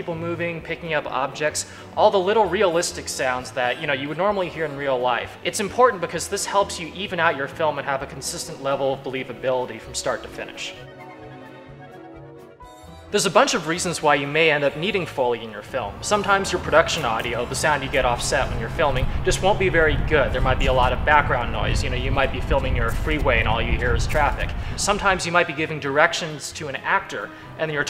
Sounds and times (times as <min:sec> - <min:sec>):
Speech: 0:00.0 - 0:10.8, 0:13.1 - 0:27.8.